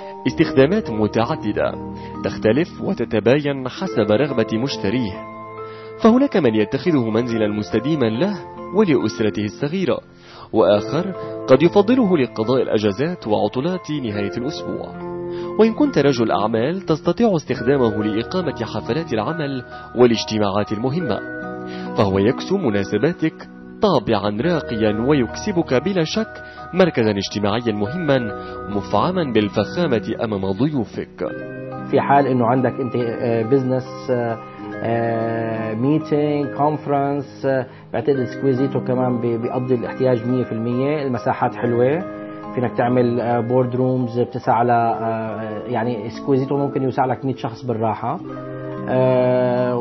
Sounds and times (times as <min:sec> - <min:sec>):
Music: 0:00.0 - 0:49.8
Speech: 0:00.2 - 0:05.2, 0:06.0 - 0:14.9, 0:15.6 - 0:21.2, 0:22.0 - 0:31.3, 0:31.9 - 0:48.2, 0:48.9 - 0:49.8.